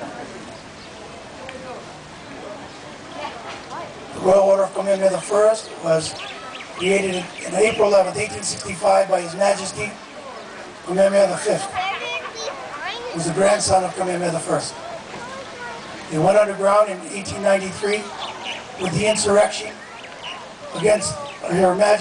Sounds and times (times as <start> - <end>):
Male speech, man speaking: 4.2 - 6.2, 6.8 - 10.0, 10.8 - 11.8, 13.1 - 14.8, 16.1 - 18.1, 18.8 - 19.8, 20.7 - 22.0.